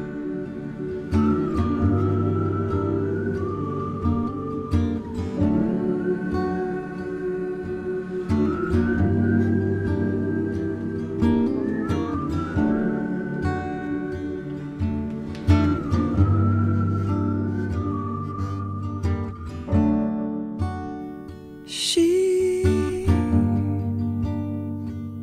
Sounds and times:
Music: 0.0 - 25.2.

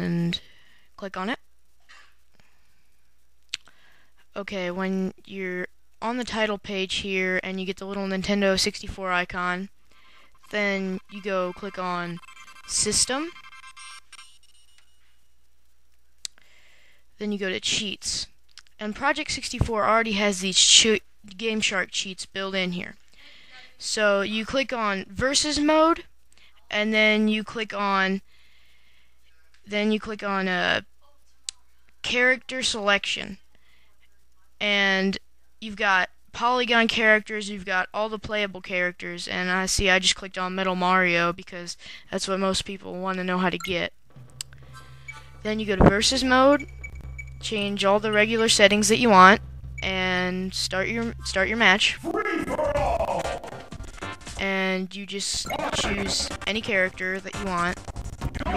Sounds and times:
Speech: 4.4 - 9.7, 10.5 - 13.4, 17.2 - 23.0, 23.6 - 28.2, 29.3 - 43.9, 45.5 - 46.7, 47.4 - 53.4, 54.4 - 57.8.

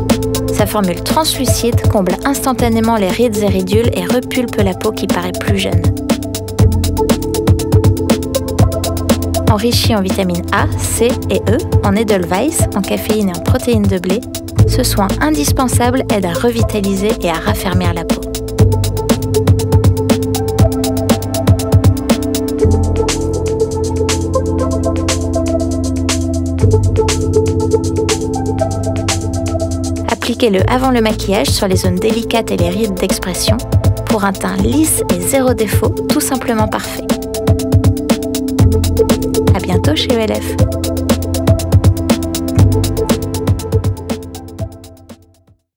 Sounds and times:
Music: 0.0 - 45.7
Speech: 0.5 - 5.9, 9.5 - 18.2, 30.0 - 37.1, 39.5 - 40.6.

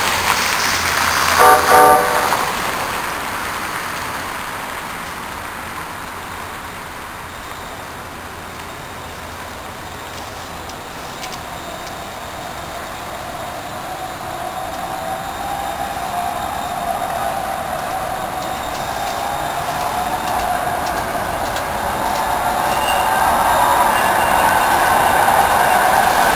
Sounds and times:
Outside, urban or manmade: 0.0 - 26.3
Train: 0.0 - 26.3.

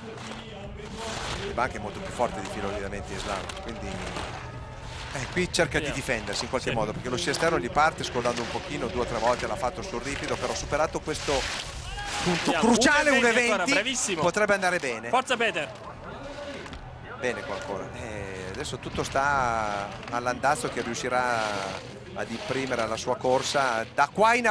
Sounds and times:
Speech: 0.0 - 4.4, 5.1 - 11.5, 12.1 - 24.5.

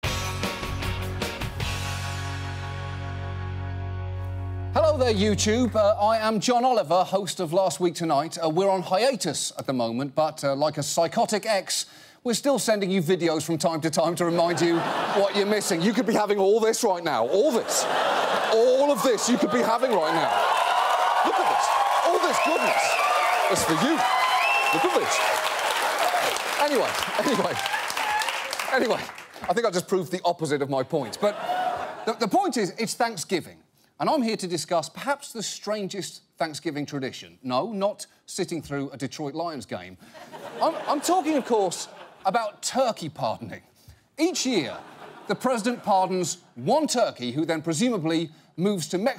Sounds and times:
Speech: 4.8 - 17.8, 18.5 - 20.3, 28.7 - 31.4, 32.1 - 40.0, 40.6 - 49.1.

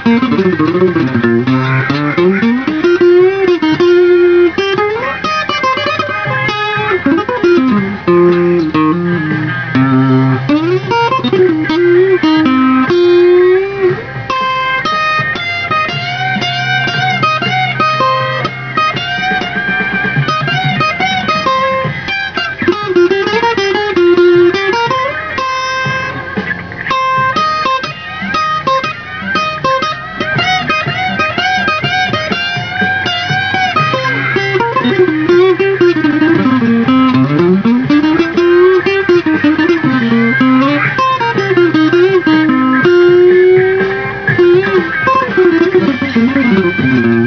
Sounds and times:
Bowed string instrument: 0.0 - 47.2
Electric guitar: 0.0 - 47.2
Tapping (guitar technique): 0.0 - 47.2.

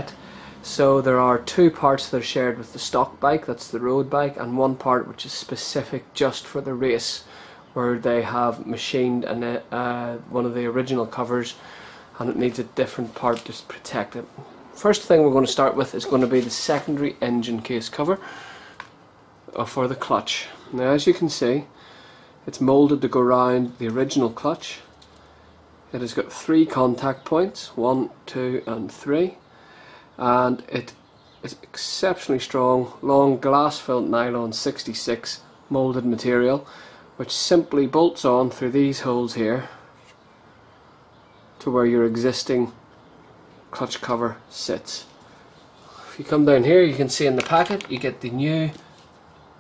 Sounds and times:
Speech: 0.0 - 11.6, 12.2 - 18.3, 19.5 - 21.7, 22.4 - 24.9, 25.9 - 29.4, 30.2 - 39.8, 41.6 - 42.8, 43.7 - 45.2, 46.0 - 48.9.

